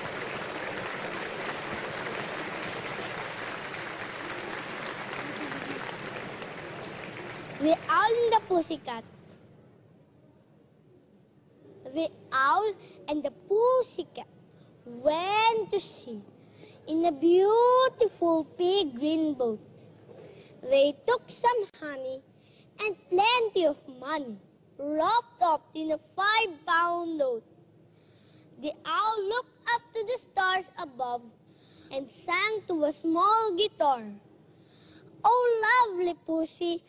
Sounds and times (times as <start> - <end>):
Speech: 7.6 - 9.1, 11.9 - 14.3, 14.9 - 16.3, 20.6 - 22.2, 22.8 - 27.4, 28.6 - 31.3, 31.9 - 34.2, 35.2 - 36.8.